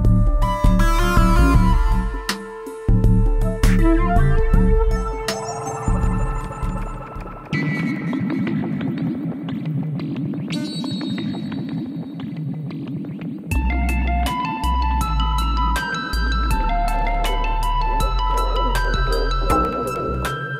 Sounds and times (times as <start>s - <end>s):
Electronic music: 0.0s - 20.6s
Synthesizer: 0.0s - 20.6s.